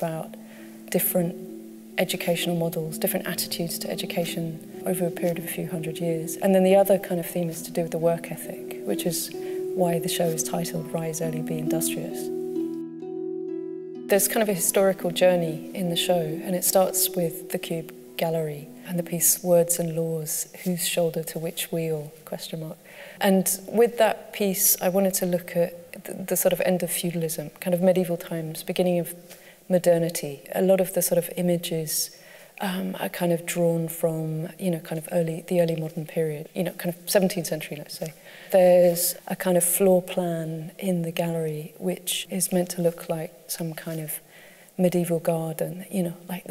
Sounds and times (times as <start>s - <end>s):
Harp: 0.0s - 22.0s.